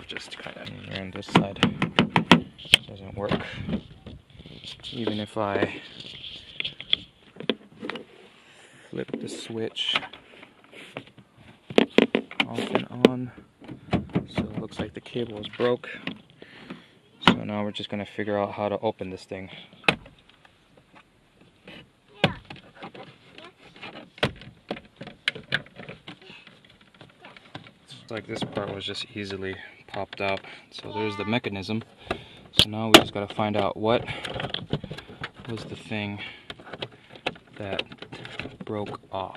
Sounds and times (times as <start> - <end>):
Speech: 0.0 - 1.7, 2.9 - 3.6, 4.7 - 5.9, 9.0 - 10.1, 12.5 - 13.4, 14.3 - 16.0, 27.9 - 31.8, 32.6 - 34.2, 35.5 - 36.3, 38.6 - 39.3.